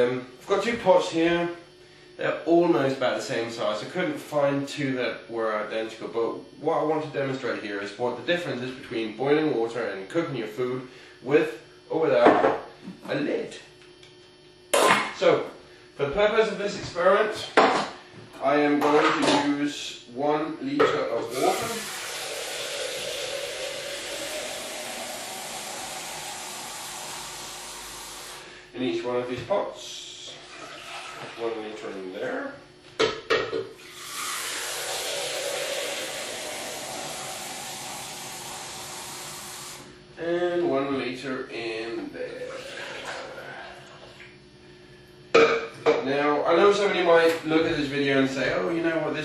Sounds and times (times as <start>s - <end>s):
Speech: 0.0s - 1.6s, 2.2s - 12.4s, 13.0s - 13.7s, 15.2s - 17.7s, 18.4s - 21.9s, 28.7s - 30.4s, 31.4s - 32.6s, 40.2s - 42.5s, 45.9s - 49.2s.